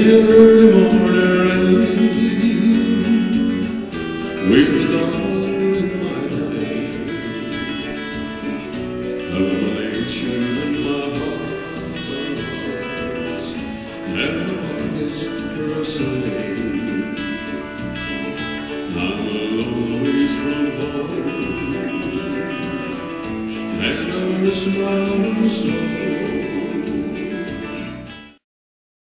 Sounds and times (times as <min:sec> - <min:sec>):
Music: 0:00.0 - 0:28.4.